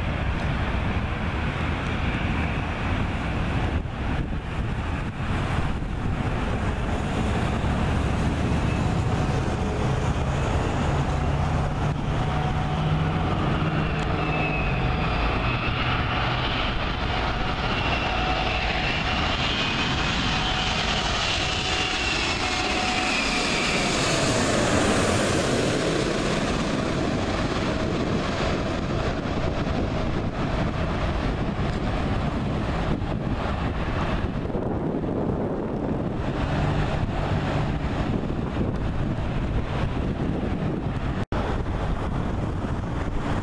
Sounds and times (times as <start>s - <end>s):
Wind noise (microphone): 0.0s - 43.4s.